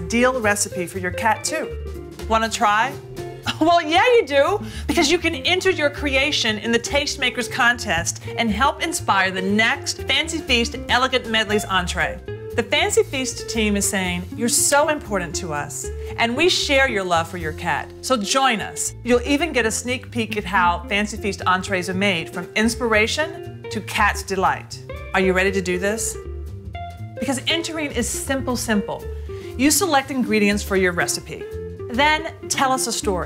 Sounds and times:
Speech: 0.0s - 1.7s, 2.3s - 26.2s, 27.2s - 29.0s, 29.6s - 33.2s
Music: 0.0s - 33.2s.

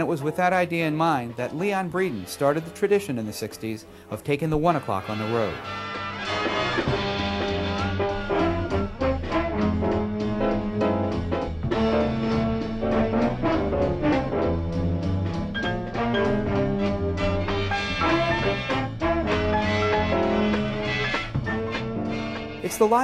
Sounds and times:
Music: 0.0s - 23.0s.

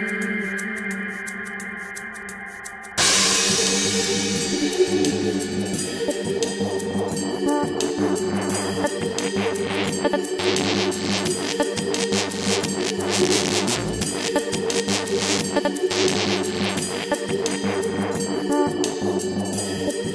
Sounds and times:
Electronic music: 3.0s - 20.1s.

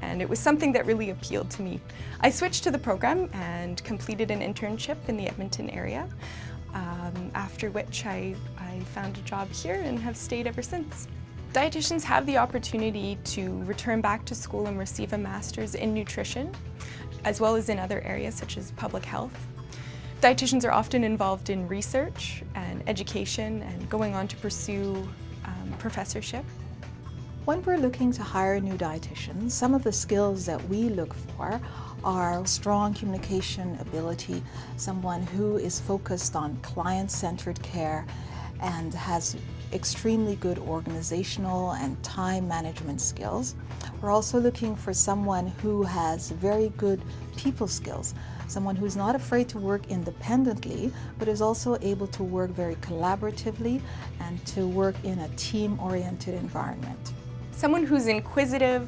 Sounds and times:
Speech: 0.0s - 6.1s, 6.8s - 16.5s, 17.2s - 19.4s, 20.2s - 26.5s, 27.5s - 58.8s
Inside, small room: 0.0s - 58.8s
Music: 0.0s - 58.8s.

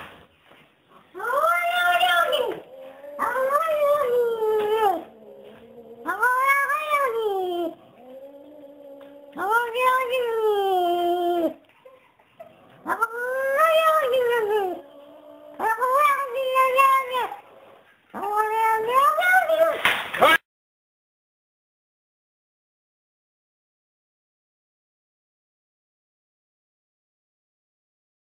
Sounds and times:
Speech: 1.1s - 5.1s, 6.0s - 7.8s, 9.3s - 11.6s, 12.9s - 14.8s, 15.6s - 17.4s, 18.2s - 20.4s.

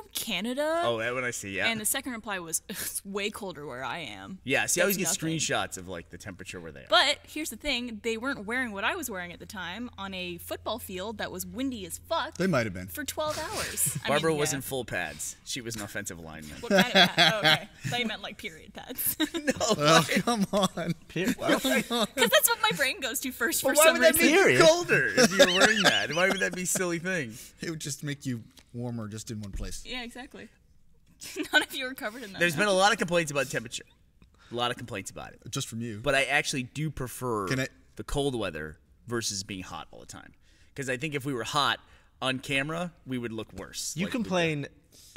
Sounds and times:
Speech: 0.8s - 2.0s, 4.5s - 7.1s, 12.4s - 18.8s, 19.4s - 30.1s, 34.6s - 39.7s.

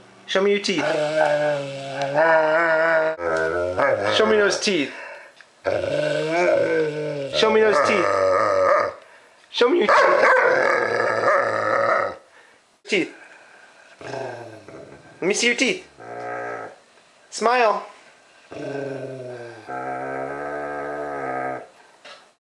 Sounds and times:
Speech: 0.3s - 1.1s, 4.0s - 5.0s, 7.3s - 8.3s, 9.5s - 10.2s, 12.9s - 13.2s, 15.2s - 15.9s, 17.3s - 18.0s.

